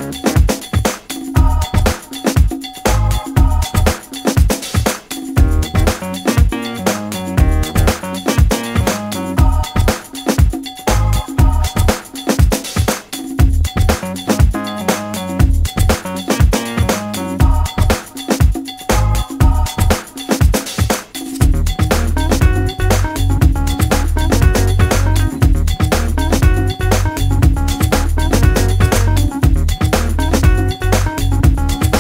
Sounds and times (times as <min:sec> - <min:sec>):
Music: 0:00.0 - 0:32.0.